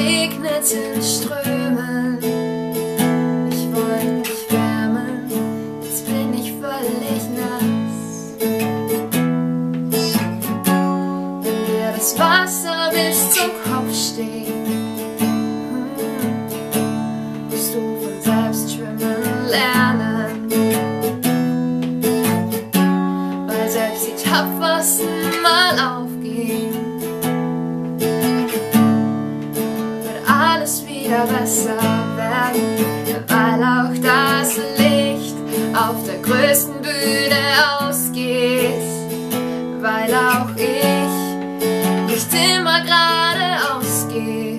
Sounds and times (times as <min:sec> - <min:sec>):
Female singing: 0:00.0 - 0:02.4, 0:03.0 - 0:08.5, 0:09.9 - 0:16.6, 0:17.5 - 0:20.8, 0:23.5 - 0:27.0, 0:30.1 - 0:44.5
Music: 0:00.0 - 0:44.5.